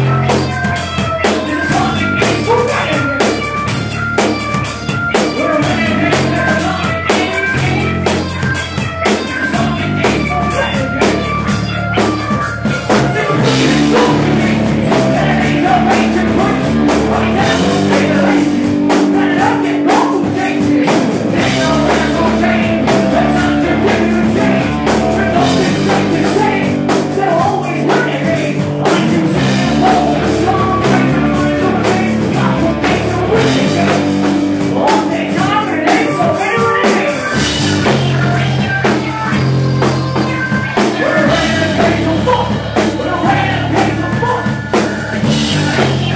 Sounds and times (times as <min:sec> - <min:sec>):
Music: 0:00.0 - 0:46.1.